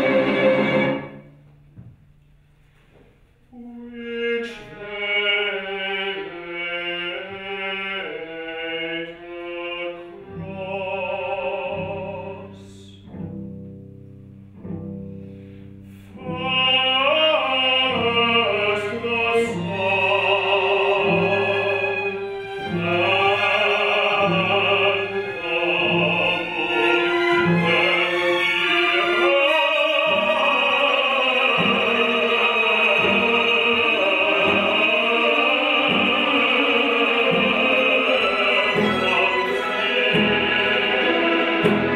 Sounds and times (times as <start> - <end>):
Opera: 0.0 - 1.9, 3.4 - 14.0, 14.7 - 41.9
Double bass: 4.7 - 41.9
Singing: 16.2 - 41.9.